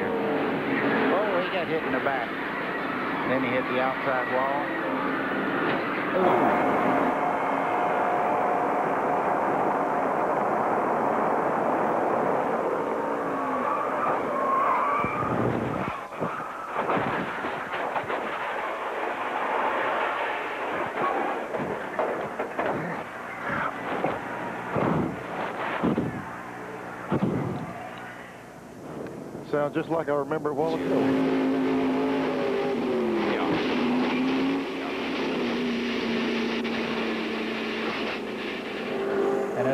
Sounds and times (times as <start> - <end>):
Speech: 29.5 - 30.8.